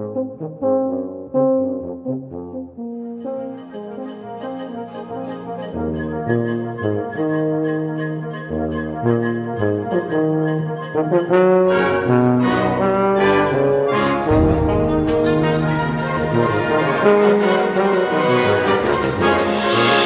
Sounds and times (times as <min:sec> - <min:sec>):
Trombone: 0:00.0 - 0:20.0
Orchestra: 0:01.9 - 0:20.0.